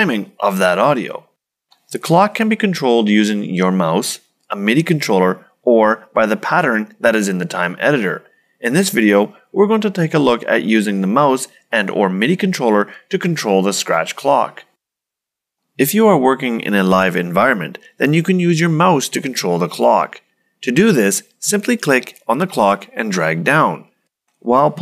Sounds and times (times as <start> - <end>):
Speech: 0.0 - 1.3, 1.9 - 14.8, 15.8 - 24.8.